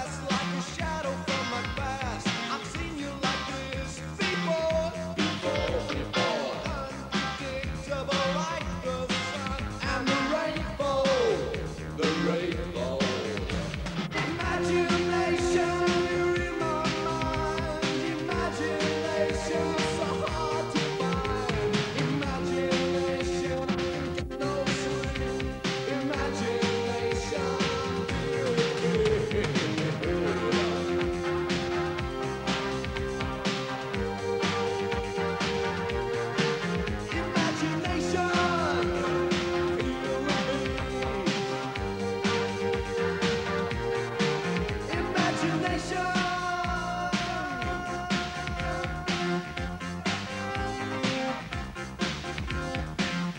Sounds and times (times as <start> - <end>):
Music: 0.0 - 53.3.